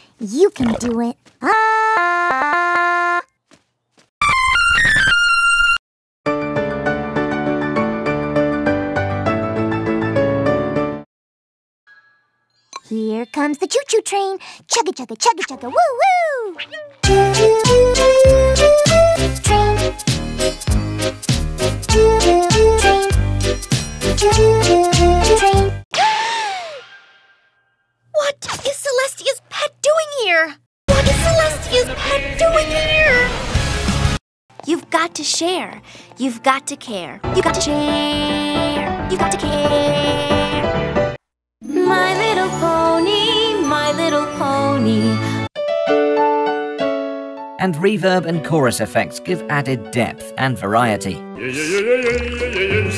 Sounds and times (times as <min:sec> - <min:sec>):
Music: 0:06.3 - 0:11.1, 0:17.0 - 0:25.8, 0:36.1 - 0:51.4.